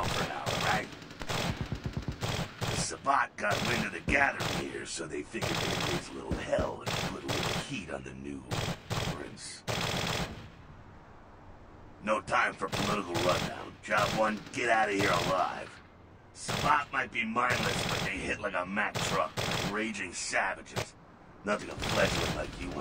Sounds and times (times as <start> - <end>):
Machine gun: 0.0 - 4.8, 5.4 - 7.8, 8.5 - 10.5, 12.6 - 15.7, 16.4 - 18.3, 18.9 - 19.9, 21.7 - 22.8.